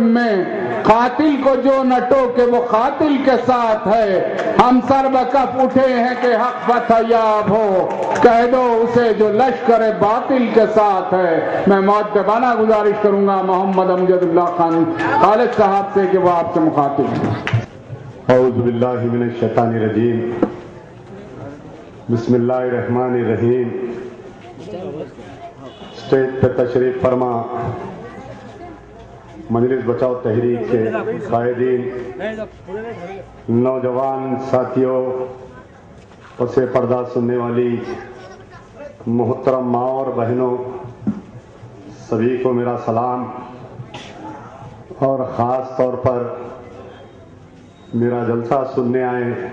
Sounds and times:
Male speech, man speaking: 0.0s - 17.4s, 18.3s - 20.5s, 21.4s - 25.2s, 25.8s - 27.9s, 29.5s - 35.5s, 36.4s - 40.9s, 41.9s - 43.6s, 44.9s - 47.1s, 47.9s - 49.5s
Narration, monologue: 0.0s - 49.5s.

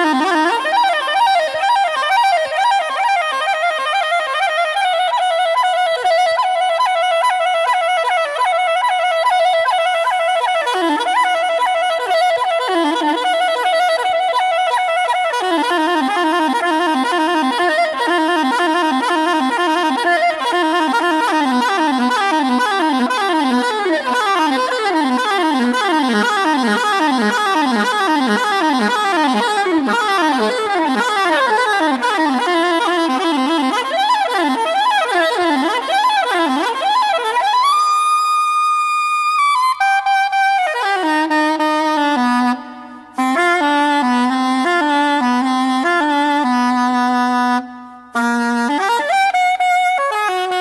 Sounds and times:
Music: 0.0s - 50.6s.

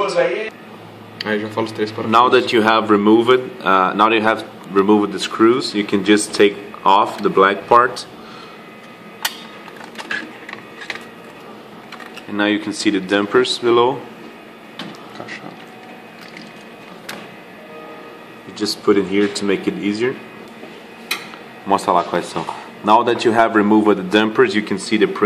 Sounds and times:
Speech: 0.0s - 0.5s, 1.2s - 8.1s, 12.3s - 14.1s, 18.5s - 20.2s, 21.7s - 25.2s
Printer: 2.1s - 25.2s.

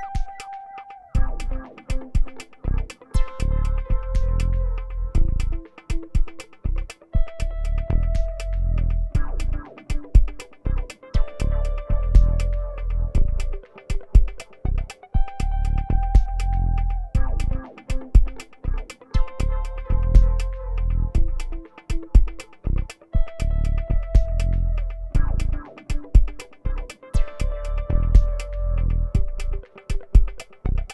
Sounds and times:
Guitar: 0.0s - 30.9s
Synthesizer: 0.0s - 30.9s.

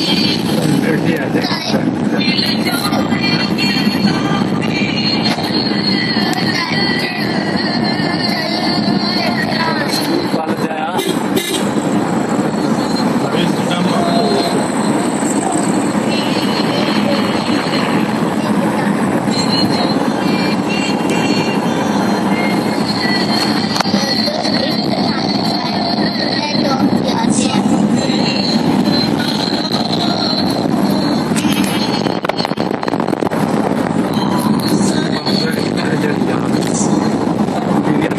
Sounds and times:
Car: 0.0s - 38.1s.

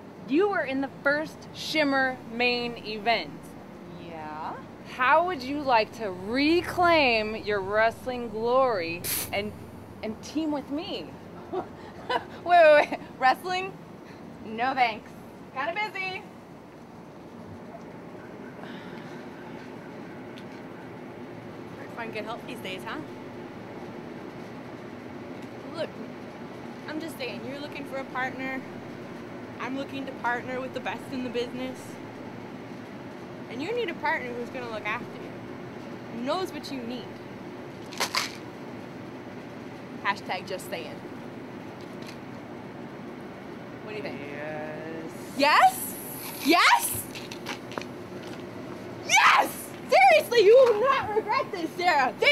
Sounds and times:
Outside, urban or manmade: 0.0s - 52.3s
Speech: 3.9s - 11.1s, 43.9s - 46.9s, 49.9s - 52.3s.

